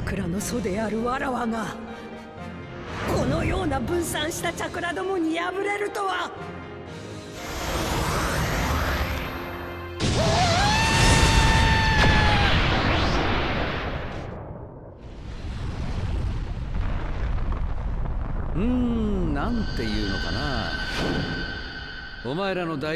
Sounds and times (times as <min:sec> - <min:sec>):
Music: 0:00.0 - 0:12.3, 0:18.6 - 0:22.9.